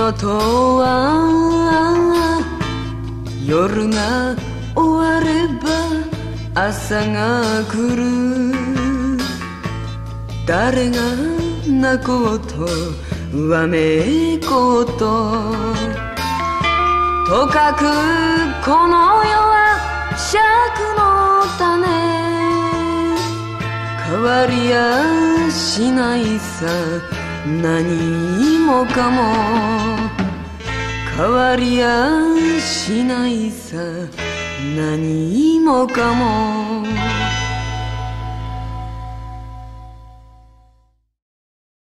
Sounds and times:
Christmas music: 0:00.0 - 0:41.1.

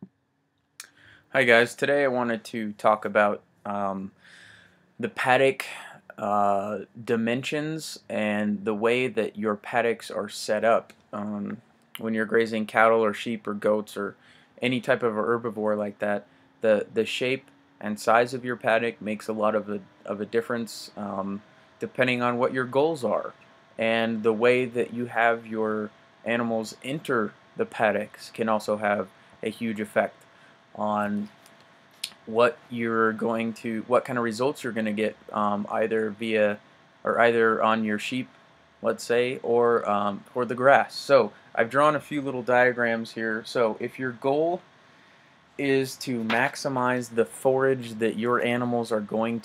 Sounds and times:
Speech: 0:00.8 - 0:04.2, 0:05.0 - 0:30.2, 0:30.8 - 0:31.4, 0:32.0 - 0:44.6, 0:45.6 - 0:49.4.

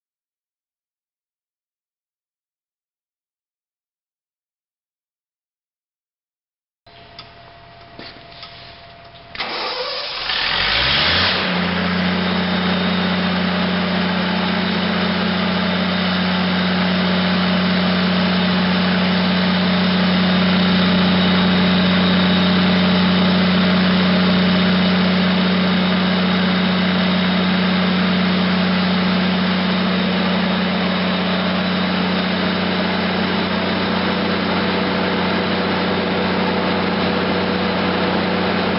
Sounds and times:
Engine: 0:06.9 - 0:38.7.

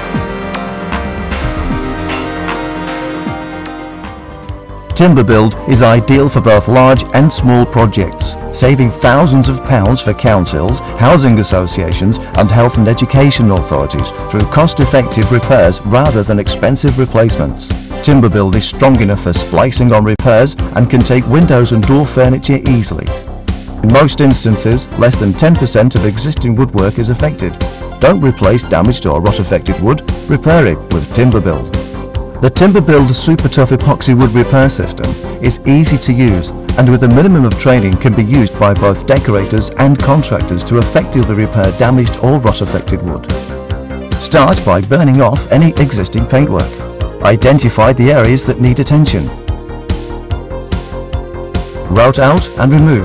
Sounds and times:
Music: 0:00.0 - 0:53.0
Speech: 0:05.0 - 0:23.2, 0:23.8 - 0:31.8, 0:32.4 - 0:43.4, 0:44.2 - 0:49.4, 0:51.9 - 0:53.0.

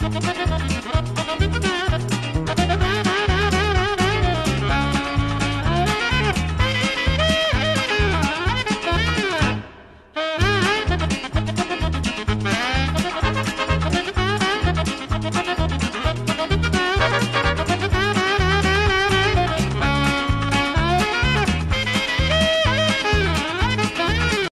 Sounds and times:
Funny music: 0:00.0 - 0:24.5.

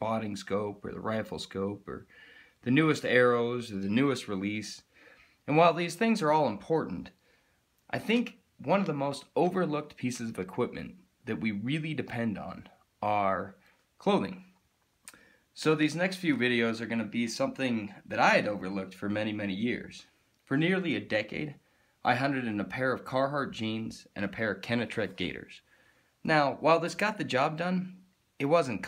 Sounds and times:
Speech: 0:00.0 - 0:04.9, 0:05.5 - 0:07.2, 0:07.9 - 0:14.6, 0:15.6 - 0:25.6, 0:26.2 - 0:28.8.

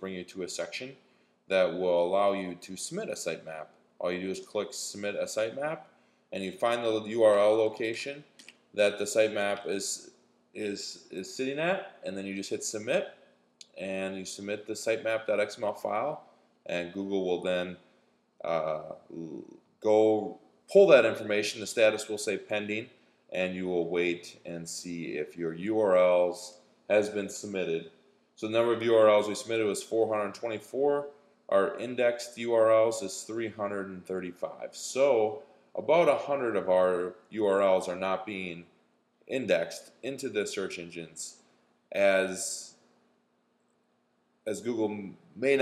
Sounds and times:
Speech: 0:00.0 - 0:05.8, 0:06.4 - 0:17.8, 0:18.4 - 0:38.7, 0:39.3 - 0:41.4, 0:42.0 - 0:42.8, 0:44.5 - 0:45.6.

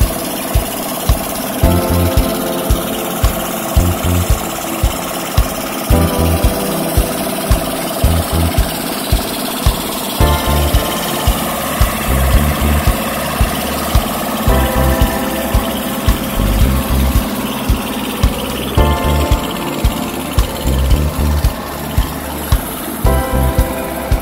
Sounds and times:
Vehicle: 0:00.0 - 0:02.3, 0:03.4 - 0:06.9, 0:07.9 - 0:24.2
Heavy engine (low frequency): 0:00.0 - 0:24.2
Idling: 0:00.0 - 0:24.2
Music: 0:00.0 - 0:24.2.

